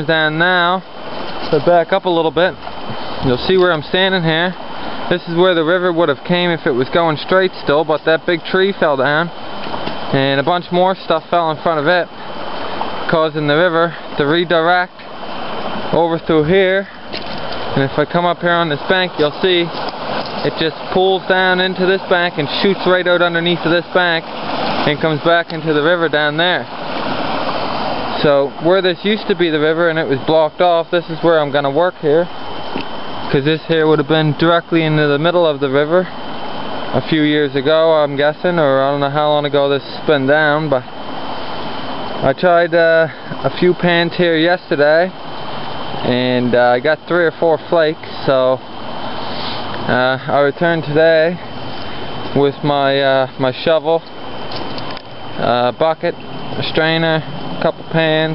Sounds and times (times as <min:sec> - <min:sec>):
Speech: 0:00.0 - 0:00.8, 0:01.5 - 0:02.6, 0:03.2 - 0:09.4, 0:10.1 - 0:12.1, 0:13.1 - 0:15.0, 0:15.9 - 0:17.0, 0:17.8 - 0:19.8, 0:20.4 - 0:26.7, 0:28.2 - 0:32.3, 0:33.3 - 0:36.2, 0:36.9 - 0:40.9, 0:42.2 - 0:45.2, 0:46.0 - 0:48.6, 0:49.9 - 0:51.4, 0:52.3 - 0:54.1, 0:55.4 - 0:58.3
Stream: 0:00.0 - 0:58.3.